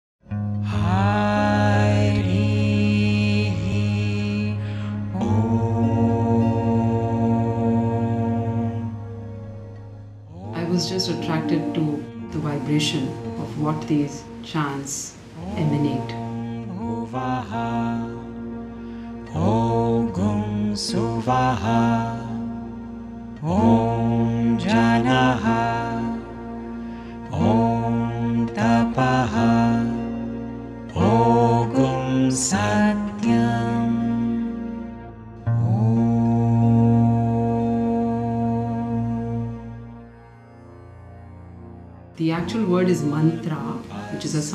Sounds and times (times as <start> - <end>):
Mantra: 0.7 - 9.0, 10.3 - 18.6, 19.2 - 22.7, 23.4 - 34.8, 42.2 - 44.5.